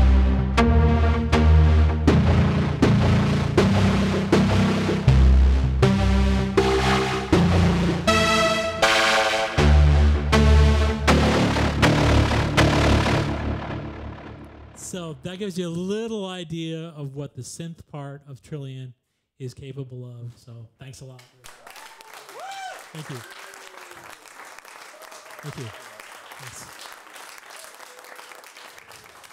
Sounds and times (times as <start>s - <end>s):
Synthesizer: 0.0s - 15.0s.